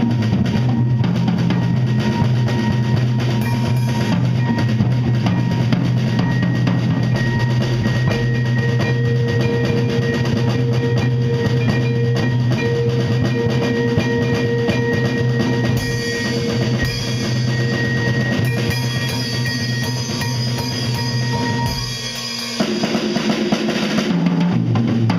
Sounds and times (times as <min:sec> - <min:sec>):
Bass drum: 0:00.0 - 0:25.1
Cymbal: 0:00.0 - 0:25.1
Drum kit: 0:00.0 - 0:25.1
Marimba, xylophone: 0:01.1 - 0:22.6.